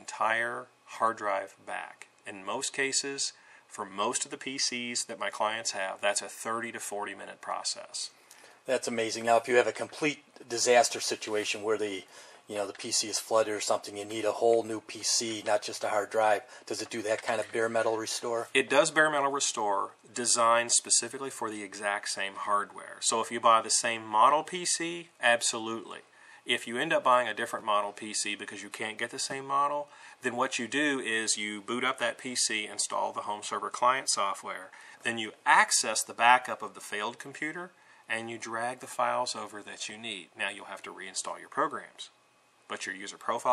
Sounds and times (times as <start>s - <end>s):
Inside, small room: 0.0s - 43.5s
Speech: 0.0s - 43.5s.